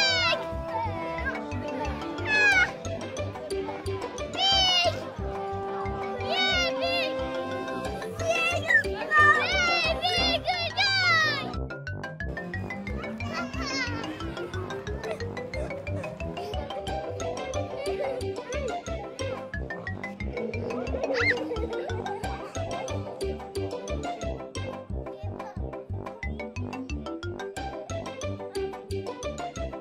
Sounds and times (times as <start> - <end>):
Music: 0.0 - 29.8.